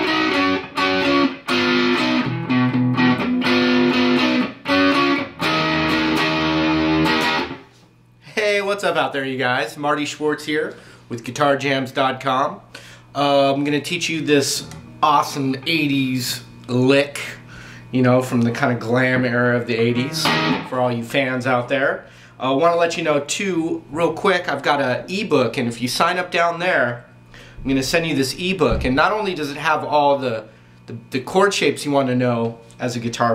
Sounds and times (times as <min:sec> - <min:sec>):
Tapping (guitar technique): 0:00.0 - 0:07.6, 0:19.9 - 0:20.7
Speech: 0:08.2 - 0:33.3
Strum: 0:19.2 - 0:20.8.